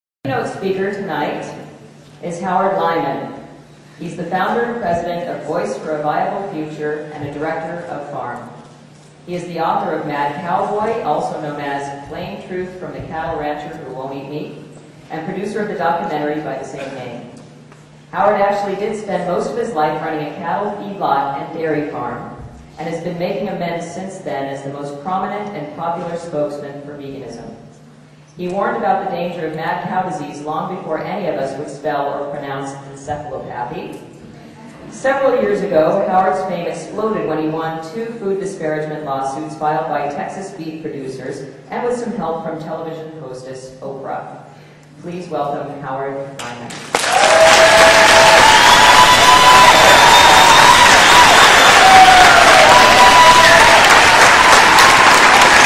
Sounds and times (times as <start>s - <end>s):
Speech: 0.2s - 8.6s, 9.3s - 17.4s, 18.1s - 27.7s, 28.4s - 44.4s, 45.0s - 46.8s.